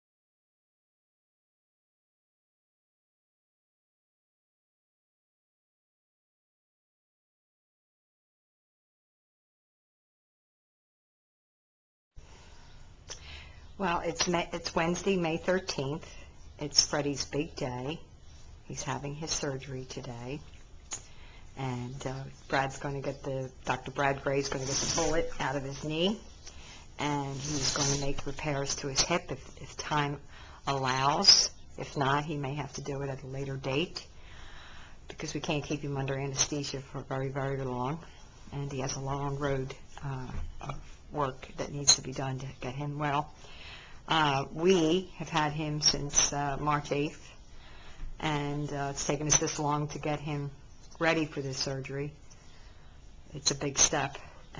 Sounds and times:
Speech: 13.8 - 18.1, 18.7 - 20.5, 21.6 - 26.3, 27.0 - 34.1, 35.1 - 43.4, 44.1 - 47.4, 48.2 - 52.2, 53.3 - 54.5.

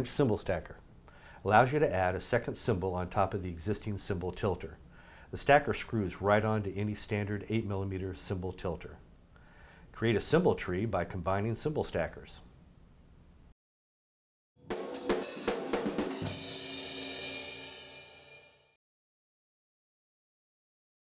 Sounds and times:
Speech: 0.0 - 0.8, 1.4 - 9.0, 9.9 - 12.5
Drum: 14.6 - 18.5
Drum kit: 14.6 - 18.6.

